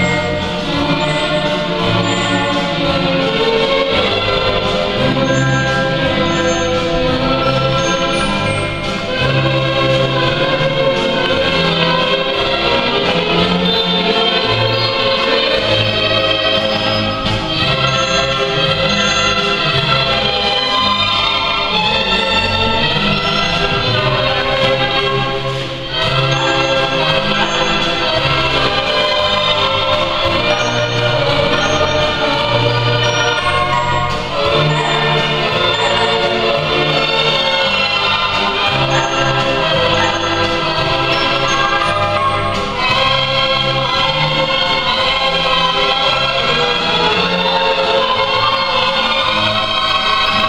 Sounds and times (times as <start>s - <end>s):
Swing music: 0.0s - 50.4s.